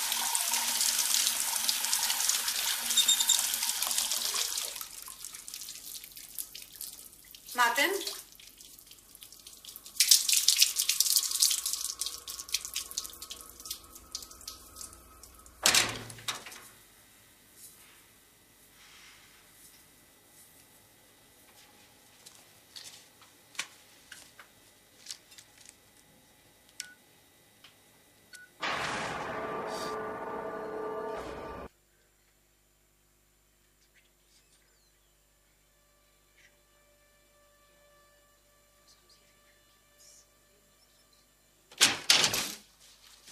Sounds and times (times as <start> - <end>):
Inside, small room: 0.0 - 43.3.